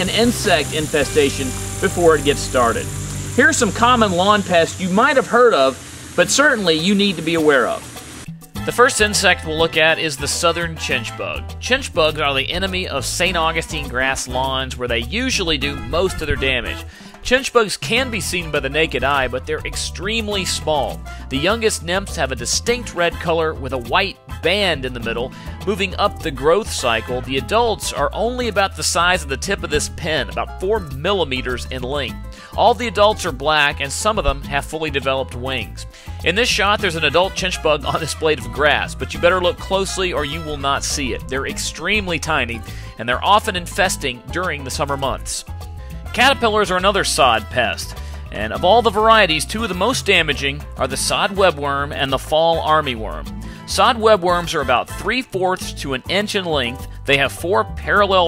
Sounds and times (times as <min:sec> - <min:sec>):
Speech: 0:00.0 - 0:07.9, 0:08.6 - 0:45.5, 0:46.1 - 0:58.2
Music: 0:00.0 - 0:58.2.